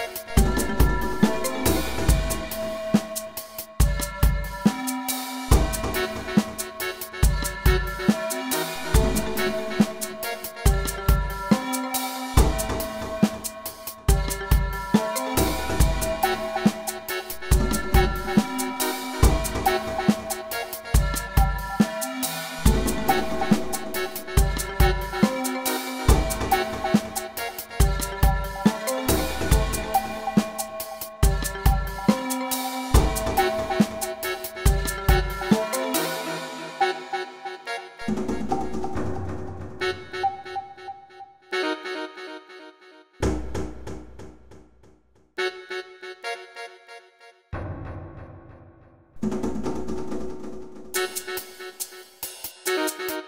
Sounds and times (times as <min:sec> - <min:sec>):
Percussion: 0:00.0 - 0:40.8, 0:47.6 - 0:53.2.